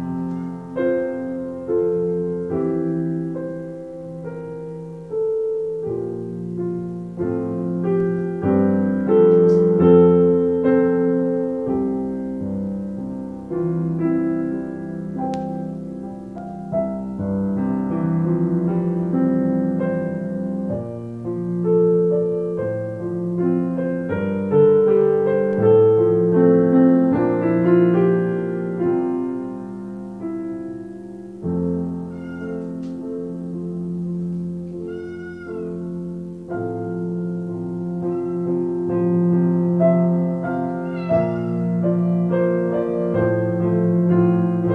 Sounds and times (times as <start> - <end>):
Music: 0.0 - 44.7
Meow: 32.1 - 32.8, 34.8 - 35.8, 38.0 - 38.7, 40.5 - 41.8.